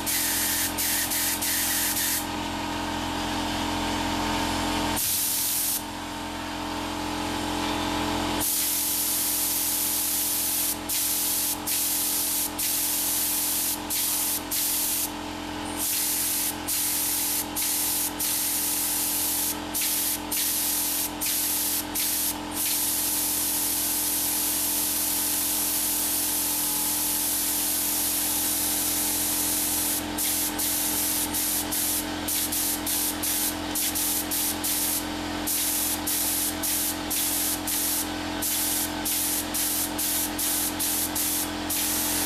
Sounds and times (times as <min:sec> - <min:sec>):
Spray: 0:00.0 - 0:02.3, 0:05.0 - 0:05.9, 0:08.4 - 0:15.2, 0:15.8 - 0:42.2.